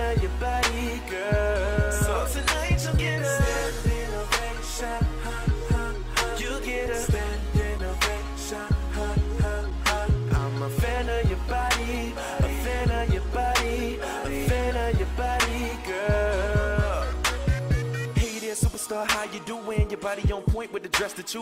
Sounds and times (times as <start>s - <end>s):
Pop music: 0.0s - 21.4s.